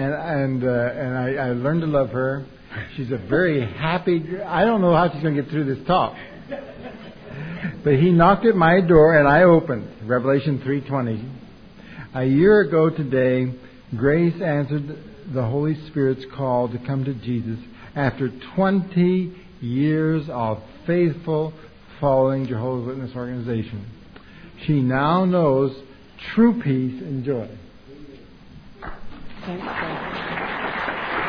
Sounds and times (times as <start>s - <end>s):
Speech: 0.0s - 6.4s, 7.8s - 11.4s, 12.1s - 24.0s, 24.6s - 28.3s.